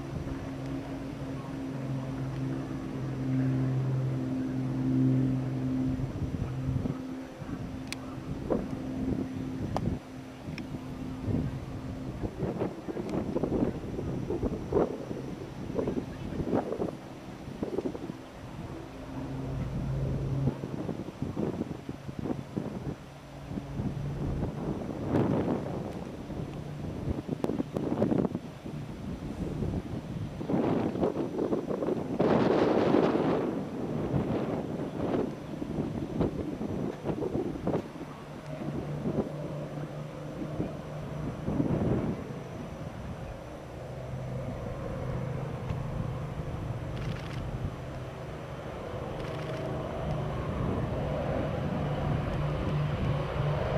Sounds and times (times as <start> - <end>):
Fixed-wing aircraft, airplane: 0.0 - 53.7.